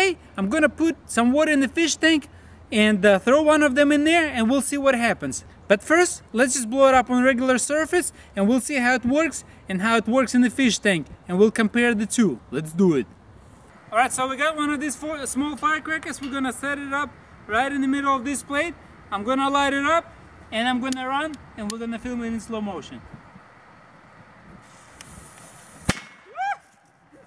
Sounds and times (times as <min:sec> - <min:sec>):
Speech: 0:00.0 - 0:13.1, 0:13.9 - 0:23.1.